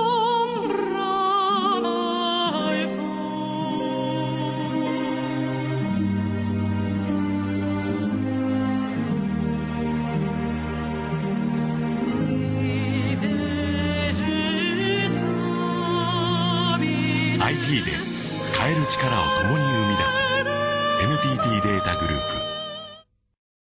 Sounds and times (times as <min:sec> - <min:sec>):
Music: 0:00.0 - 0:23.0
Speech: 0:17.4 - 0:20.4, 0:21.0 - 0:22.6.